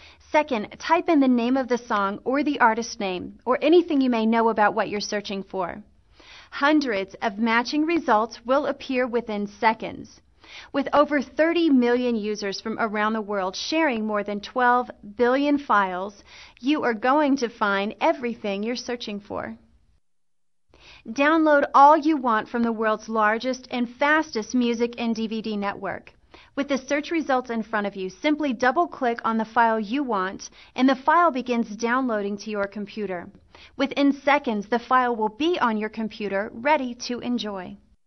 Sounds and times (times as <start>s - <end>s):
Speech: 0.2s - 5.8s, 6.5s - 19.6s, 21.1s - 37.8s.